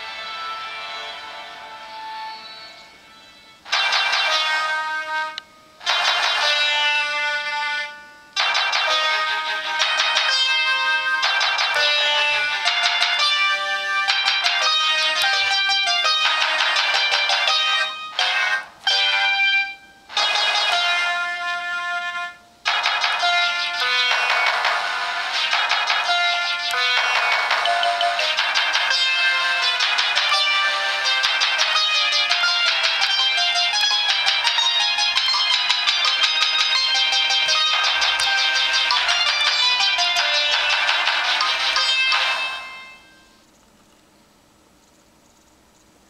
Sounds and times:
Soundtrack music: 0:22.7 - 0:43.2.

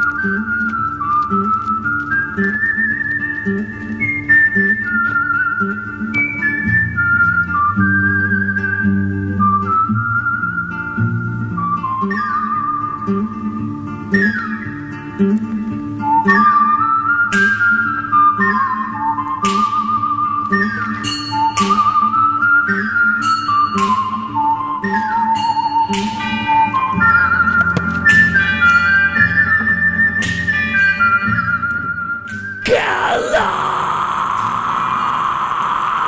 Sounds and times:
Music: 0:00.0 - 0:36.0.

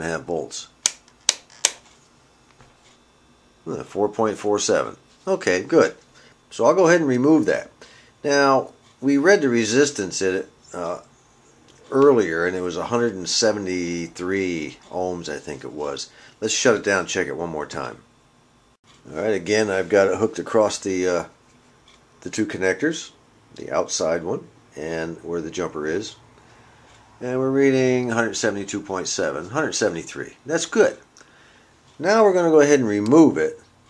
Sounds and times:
Speech: 0:00.0 - 0:00.8, 0:03.6 - 0:11.1, 0:11.8 - 0:18.1, 0:19.0 - 0:21.4, 0:22.2 - 0:26.3, 0:27.2 - 0:31.1, 0:32.0 - 0:33.7.

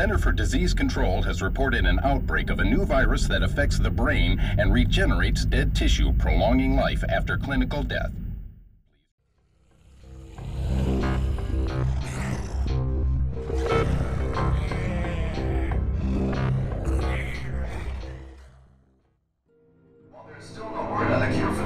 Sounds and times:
Speech: 0:00.0 - 0:08.2, 0:20.2 - 0:21.6.

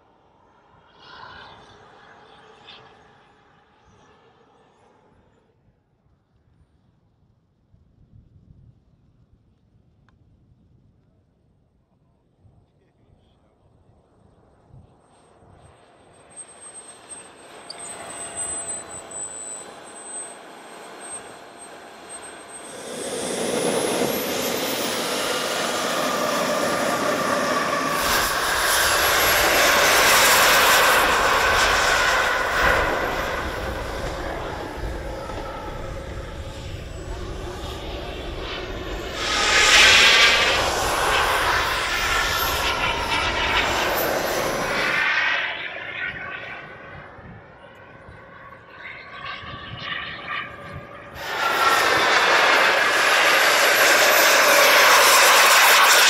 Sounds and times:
Fixed-wing aircraft, airplane: 0:00.0 - 0:56.1.

